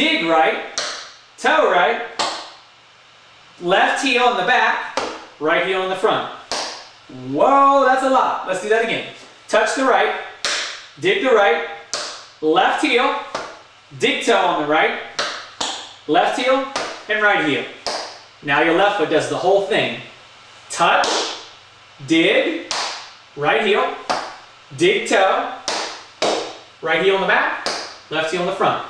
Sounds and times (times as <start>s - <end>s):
Speech: 0.0s - 0.7s, 1.4s - 2.2s, 3.6s - 6.4s, 7.1s - 10.3s, 11.0s - 11.8s, 12.4s - 13.4s, 14.0s - 15.1s, 16.1s - 17.8s, 18.4s - 21.3s, 22.0s - 22.7s, 23.4s - 24.0s, 24.7s - 25.6s, 26.8s - 28.9s.